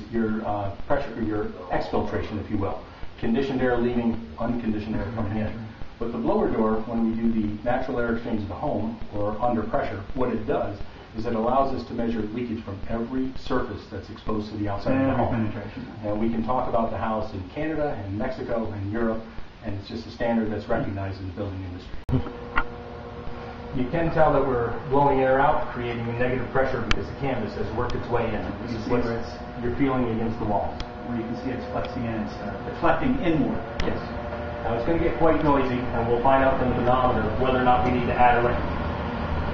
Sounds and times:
Speech: 0.0 - 22.2, 23.8 - 38.7.

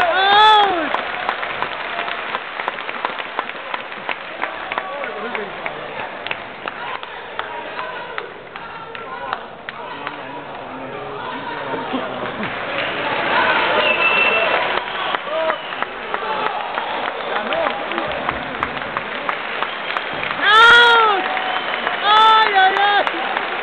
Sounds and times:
Inside, public space: 0.0 - 23.6.

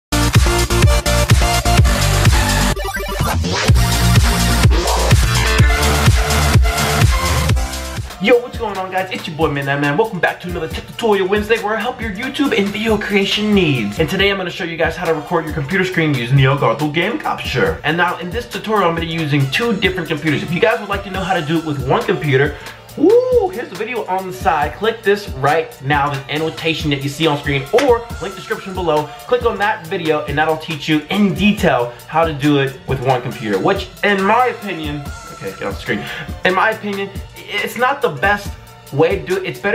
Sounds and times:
Electronic dance music: 0.1 - 8.2, 16.0 - 16.8
Speech: 8.2 - 39.7.

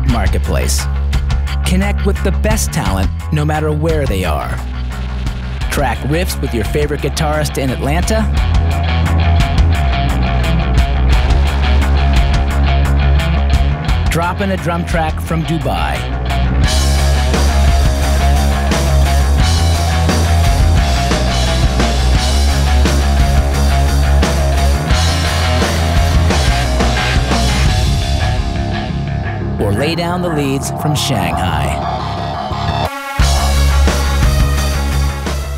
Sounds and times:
Speech: 0.0 - 0.9, 1.6 - 4.6, 5.7 - 8.3, 14.1 - 16.1, 29.6 - 31.8
Music: 0.0 - 35.5.

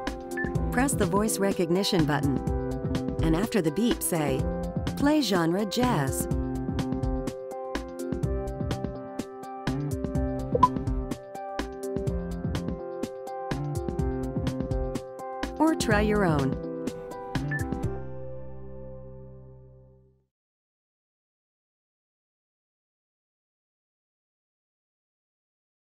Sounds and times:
Music: 0.0 - 20.3.

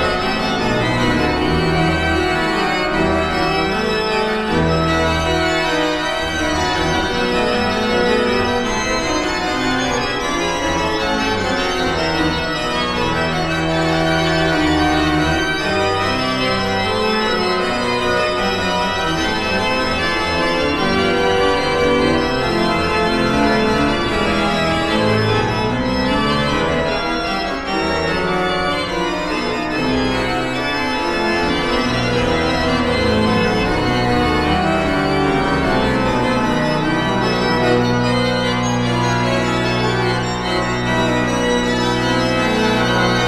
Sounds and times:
Keyboard (musical): 0.0 - 43.2.

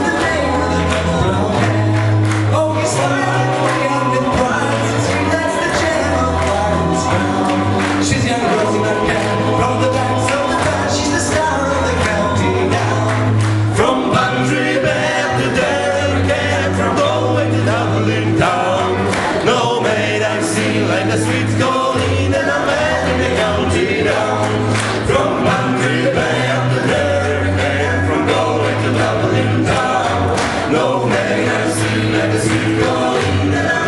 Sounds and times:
Music: 0.0 - 33.8.

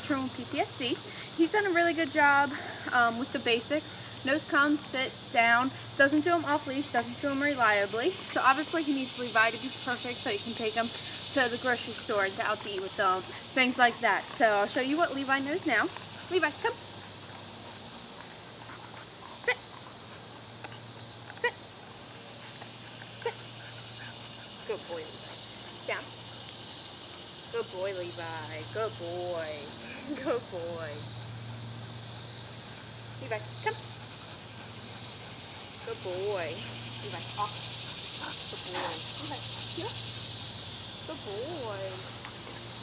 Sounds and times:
Speech: 0.0 - 16.8, 41.1 - 42.0.

